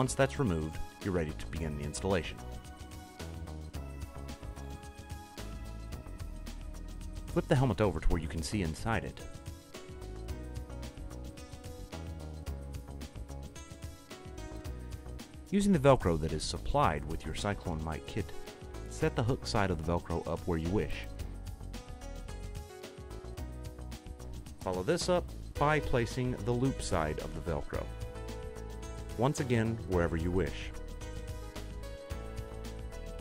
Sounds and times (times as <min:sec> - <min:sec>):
Speech: 0:00.0 - 0:02.4, 0:07.3 - 0:09.2, 0:15.5 - 0:21.1, 0:24.6 - 0:27.9, 0:29.2 - 0:30.7
Music: 0:00.0 - 0:33.2.